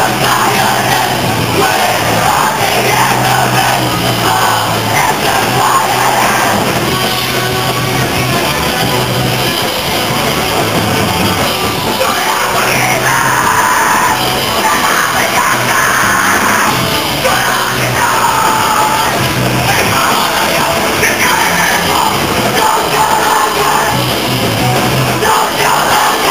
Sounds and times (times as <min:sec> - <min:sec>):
Punk rock: 0:00.0 - 0:26.3
Bellow: 0:12.0 - 0:19.1.